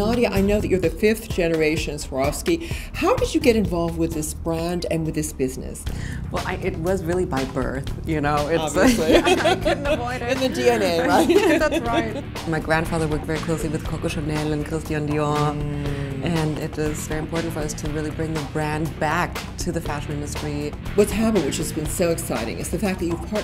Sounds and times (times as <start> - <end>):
Music: 0.0 - 23.4
Speech: 6.4 - 23.4.